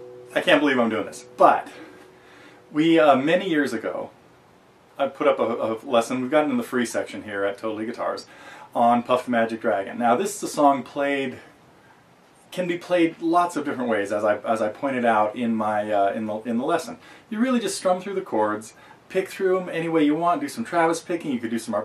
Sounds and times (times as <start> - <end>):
Speech: 0.3 - 1.9, 2.7 - 4.2, 5.0 - 11.5, 12.5 - 21.8.